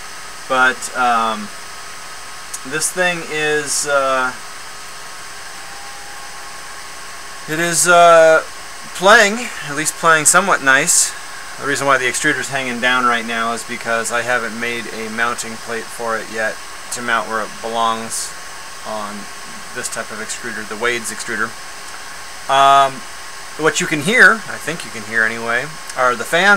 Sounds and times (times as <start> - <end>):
Speech: 0.5 - 1.5, 2.6 - 4.4, 7.5 - 18.3, 18.9 - 21.5, 22.5 - 23.0, 23.6 - 26.5.